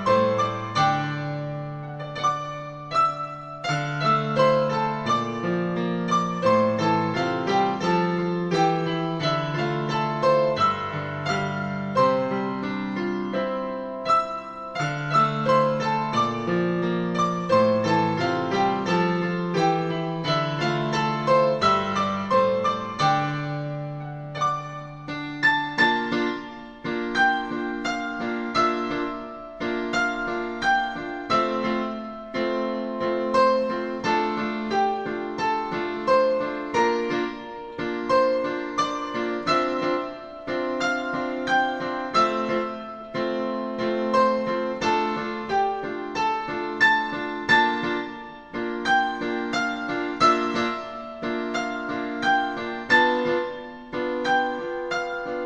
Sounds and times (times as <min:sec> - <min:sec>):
Music: 0:00.0 - 0:55.4.